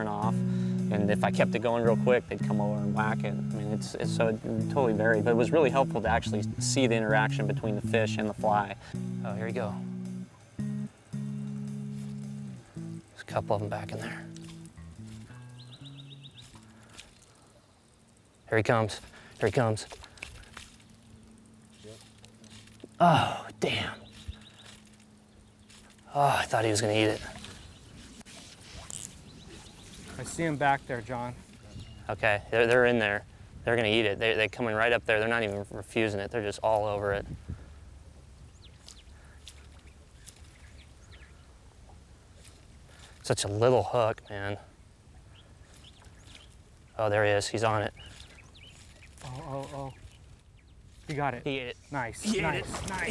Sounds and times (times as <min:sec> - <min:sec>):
Speech: 0:00.0 - 0:09.8, 0:13.2 - 0:14.2, 0:18.5 - 0:19.9, 0:26.1 - 0:27.4, 0:30.2 - 0:31.4, 0:32.1 - 0:37.2, 0:47.0 - 0:47.9, 0:49.2 - 0:50.0, 0:51.1 - 0:53.1.